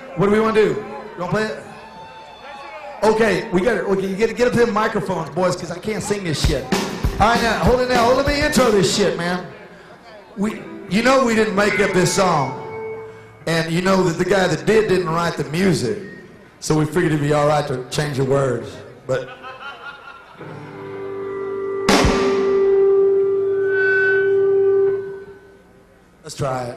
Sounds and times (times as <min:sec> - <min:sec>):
Speech: 0:03.0 - 0:09.6, 0:10.4 - 0:12.6, 0:16.6 - 0:19.3, 0:26.2 - 0:26.7
Music: 0:06.4 - 0:09.2, 0:10.4 - 0:14.2, 0:20.4 - 0:25.9.